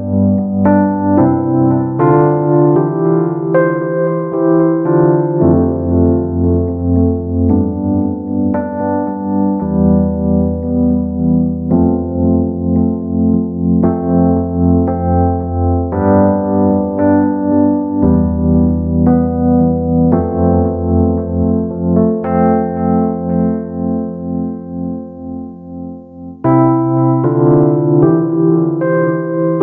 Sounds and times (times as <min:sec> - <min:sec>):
Music: 0:00.0 - 0:29.6.